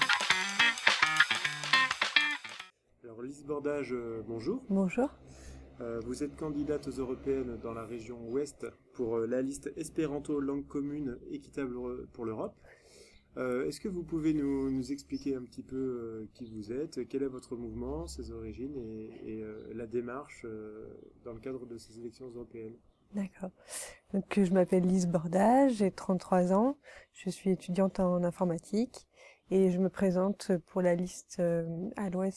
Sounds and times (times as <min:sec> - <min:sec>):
Speech: 0:03.0 - 0:05.2, 0:05.8 - 0:12.6, 0:13.4 - 0:32.3.